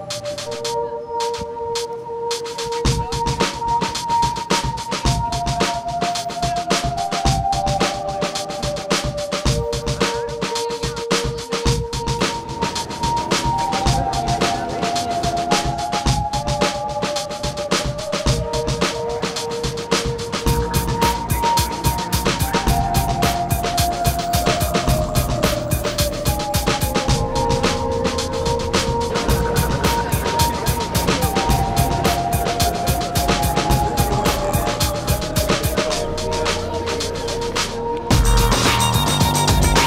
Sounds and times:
Music: 0:00.0 - 0:39.8
Speech: 0:09.7 - 0:12.4, 0:13.6 - 0:15.7, 0:33.4 - 0:37.6.

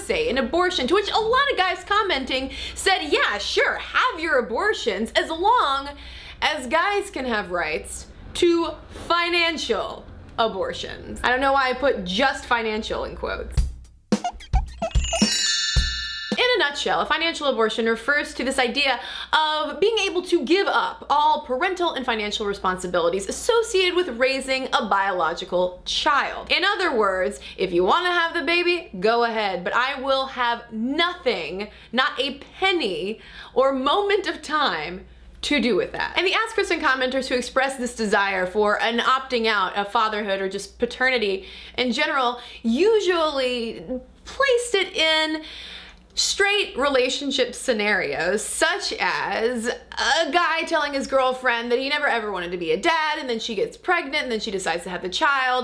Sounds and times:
Speech: 0:00.0 - 0:13.6, 0:16.4 - 0:45.4, 0:46.2 - 0:55.6
Music: 0:13.6 - 0:16.1.

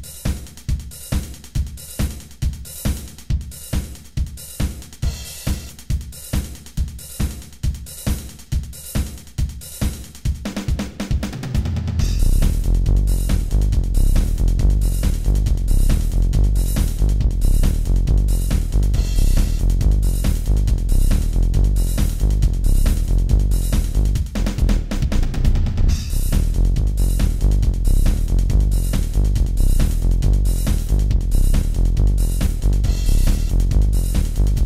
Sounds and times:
Music: 0:00.0 - 0:34.6.

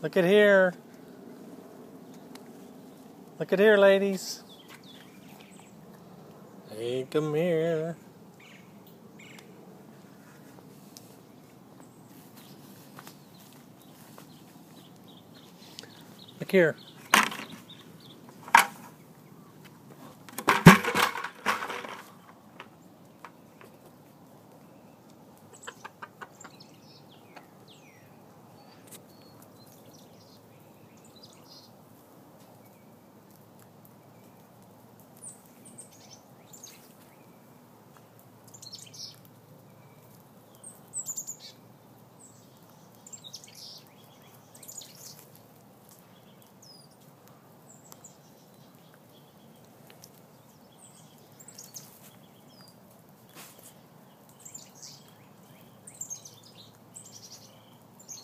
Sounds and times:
Chicken, rooster: 0:25.5 - 0:26.6.

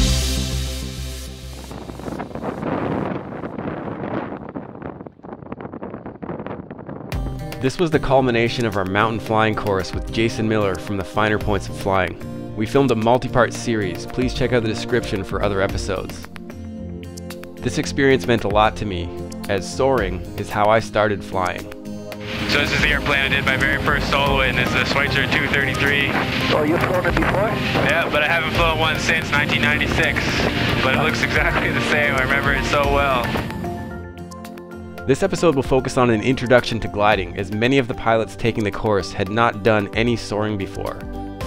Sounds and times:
Music: 0:00.0 - 0:04.3, 0:07.1 - 0:41.4
Speech: 0:07.6 - 0:16.3, 0:17.6 - 0:21.7, 0:22.4 - 0:33.3, 0:35.1 - 0:41.0.

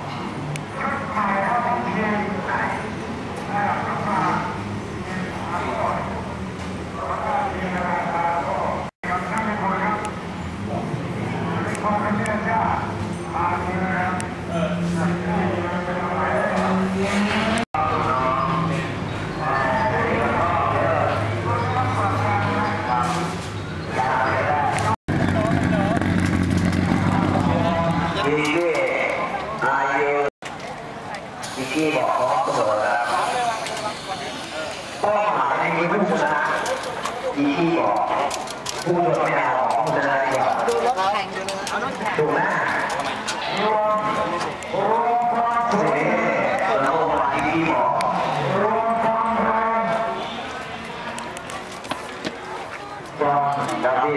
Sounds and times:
Speech: 0:00.8 - 0:06.2, 0:07.0 - 0:26.1, 0:26.9 - 0:51.7, 0:52.5 - 0:54.1.

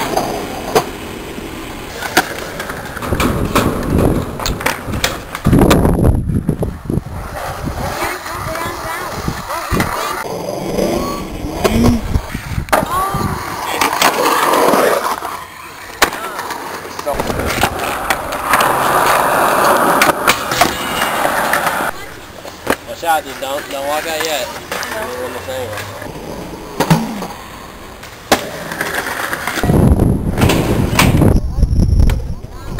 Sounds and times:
Skateboard: 0:00.0 - 0:32.7.

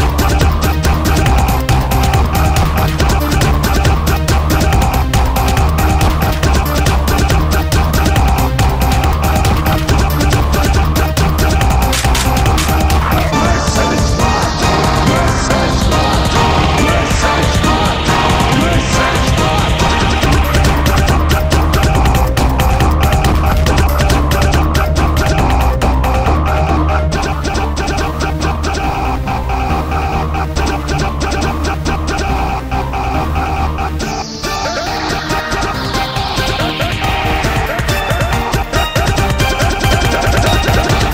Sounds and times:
Electronic music: 0:00.0 - 0:41.1.

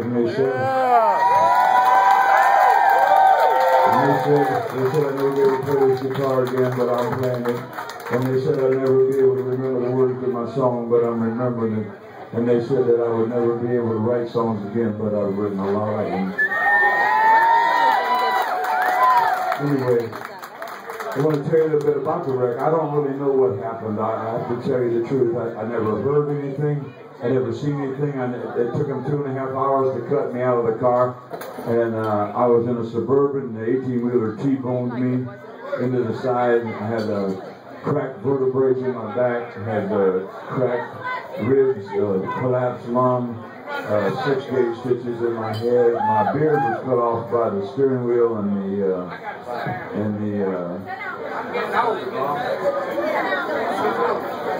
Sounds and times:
Speech: 0:00.0 - 0:01.1, 0:03.9 - 0:16.4, 0:19.6 - 0:20.2, 0:21.2 - 0:51.0.

